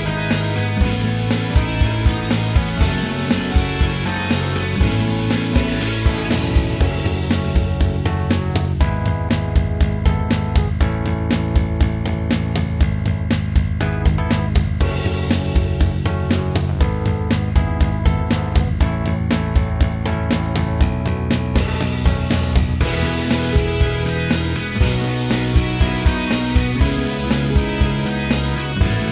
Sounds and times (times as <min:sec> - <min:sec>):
Music: 0:00.0 - 0:29.1.